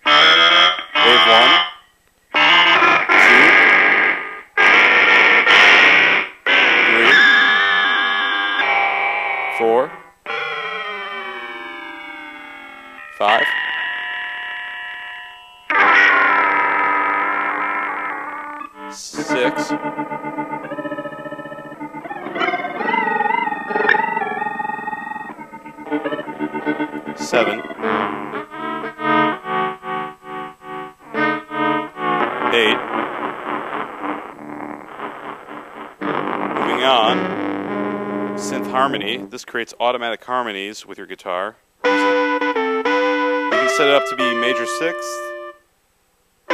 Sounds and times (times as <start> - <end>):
Effects unit: 0.0 - 39.4, 41.6 - 45.8
Speech: 1.0 - 1.5, 3.2 - 3.6, 6.9 - 7.2, 9.6 - 9.9, 13.2 - 13.5, 18.9 - 19.7, 27.2 - 27.6, 32.5 - 32.8, 36.6 - 37.2, 38.4 - 41.6, 43.6 - 45.3.